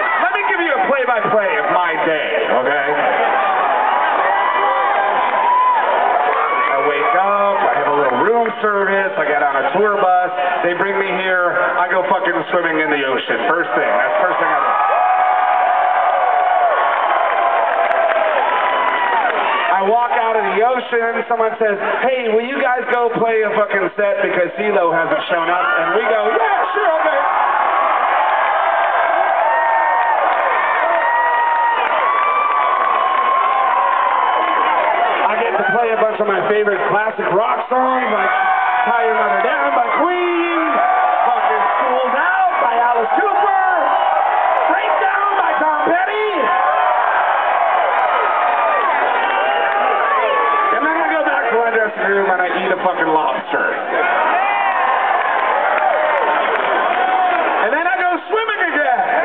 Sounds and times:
Speech: 0.2s - 3.0s, 6.8s - 14.7s, 19.7s - 27.3s, 35.2s - 43.9s, 44.7s - 46.6s, 50.7s - 53.8s, 57.6s - 59.2s.

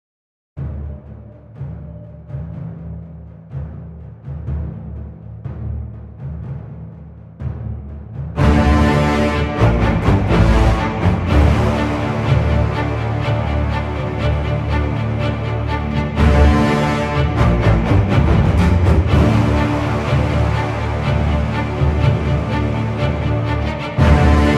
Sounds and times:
Timpani: 0.6s - 24.5s.

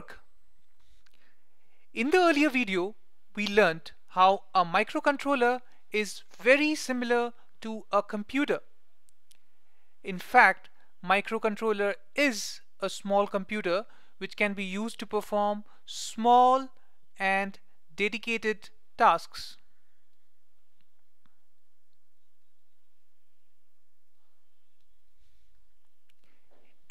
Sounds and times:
Speech: 0.0s - 0.2s, 2.0s - 8.7s, 10.1s - 19.6s.

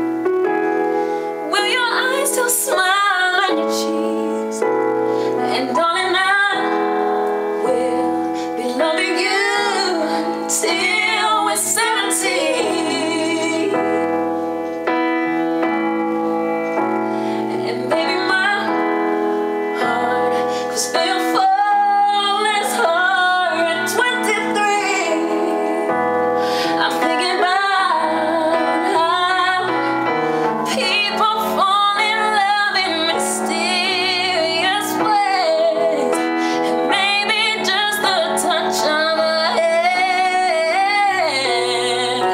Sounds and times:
Keyboard (musical): 0.0s - 42.3s.

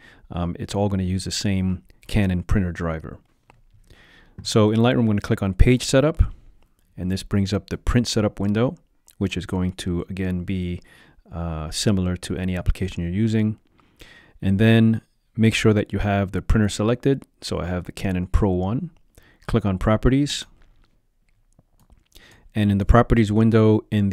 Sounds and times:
Speech: 0.3s - 3.2s, 4.4s - 6.4s, 7.0s - 13.6s, 14.4s - 20.6s, 22.5s - 24.1s.

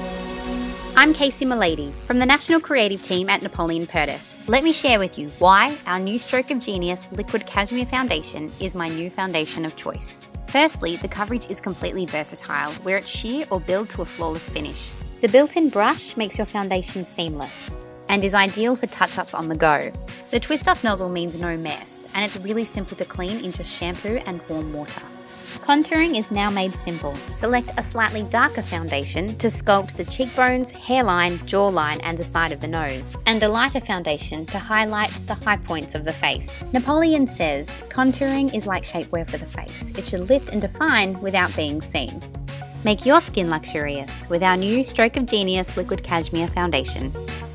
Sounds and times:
Music: 0.0s - 47.5s
Speech: 1.0s - 42.2s, 42.8s - 47.2s.

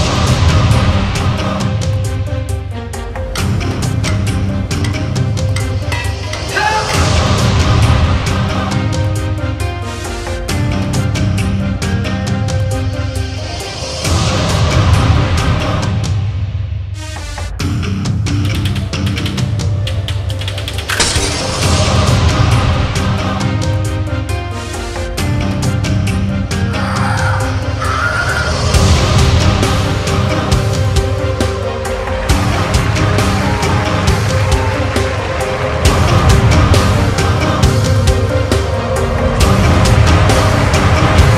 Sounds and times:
Music: 0.0s - 41.3s.

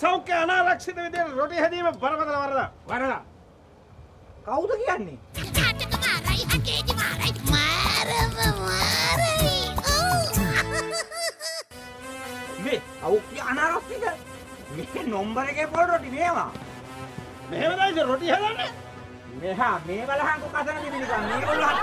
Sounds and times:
Music for children: 5.4s - 11.1s.

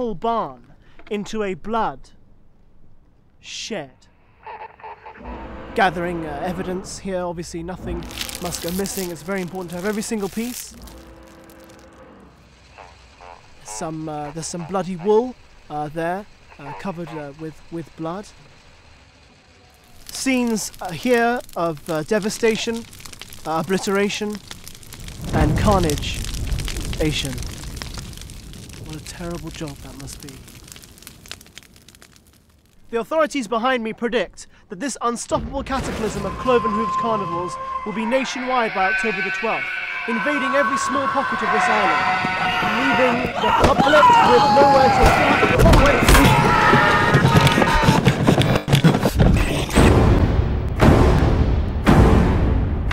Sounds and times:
Speech: 0.0s - 2.2s, 3.4s - 4.1s, 5.8s - 10.8s, 13.6s - 18.3s, 20.1s - 22.8s, 23.5s - 24.4s, 25.3s - 26.3s, 27.0s - 27.4s, 28.8s - 30.4s, 32.9s - 46.5s, 49.2s - 50.0s.

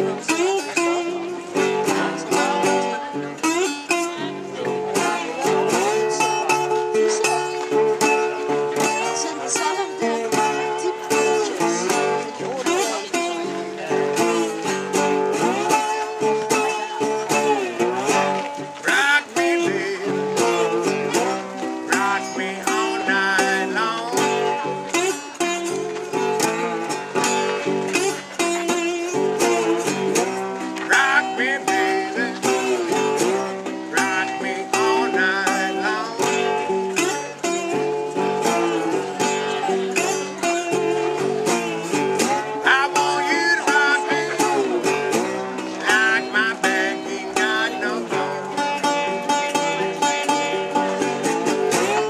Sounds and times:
Acoustic guitar: 0.0s - 52.1s.

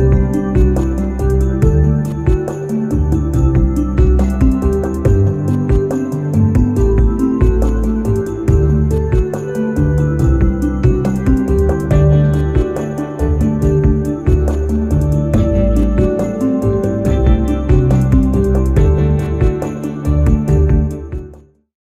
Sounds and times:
Music: 0.0s - 21.7s.

